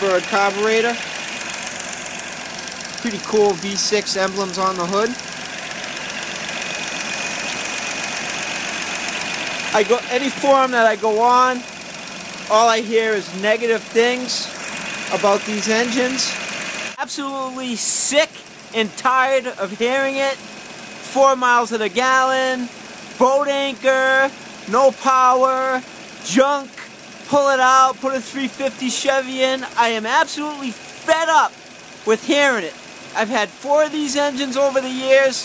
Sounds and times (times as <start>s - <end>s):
Speech: 0.0s - 1.0s, 3.0s - 5.2s, 9.8s - 11.6s, 12.5s - 14.5s, 15.1s - 16.4s, 17.0s - 20.4s, 21.1s - 31.5s, 32.1s - 35.4s
Idling: 0.0s - 35.4s
Vehicle: 0.0s - 35.4s.